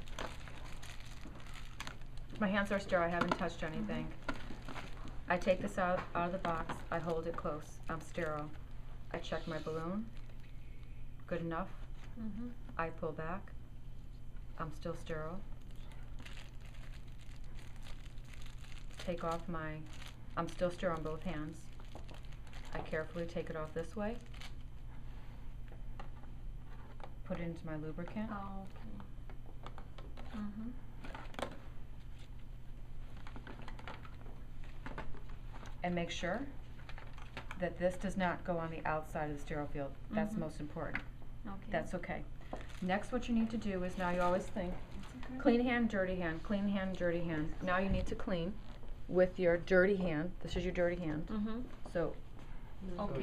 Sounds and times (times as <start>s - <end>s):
Inside, small room: 0.0s - 53.2s.